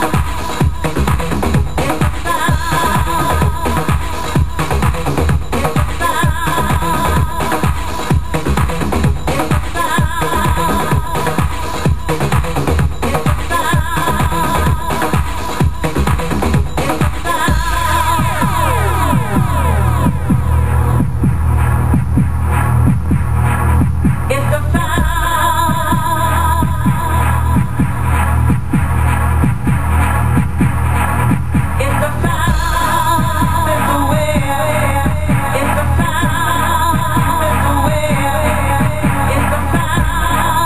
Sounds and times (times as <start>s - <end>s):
Music: 0.0s - 40.6s.